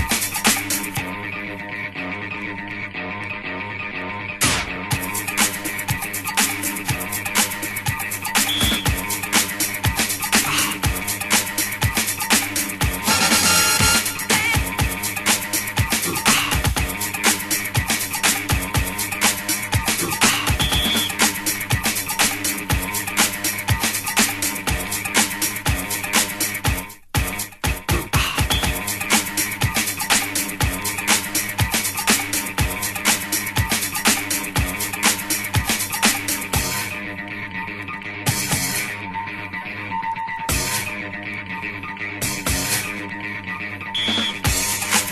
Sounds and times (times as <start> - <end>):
House music: 0.0 - 45.1.